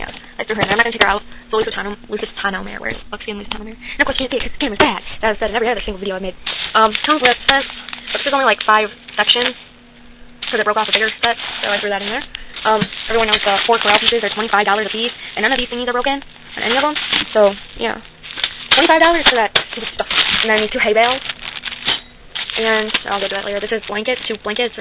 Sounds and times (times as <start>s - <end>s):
Speech: 0.0s - 9.6s, 10.5s - 18.0s, 18.8s - 21.2s, 22.6s - 24.8s.